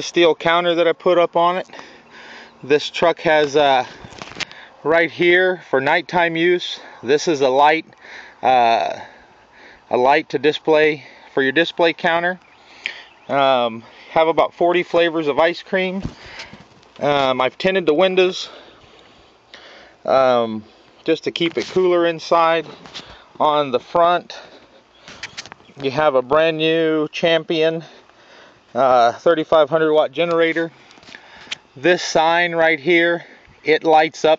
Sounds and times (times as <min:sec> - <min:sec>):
Speech: 0:00.0 - 0:01.7, 0:02.6 - 0:04.0, 0:04.8 - 0:09.1, 0:09.9 - 0:12.4, 0:13.3 - 0:16.1, 0:17.0 - 0:18.6, 0:20.1 - 0:22.8, 0:23.4 - 0:24.5, 0:25.8 - 0:27.9, 0:28.7 - 0:30.7, 0:31.8 - 0:34.3.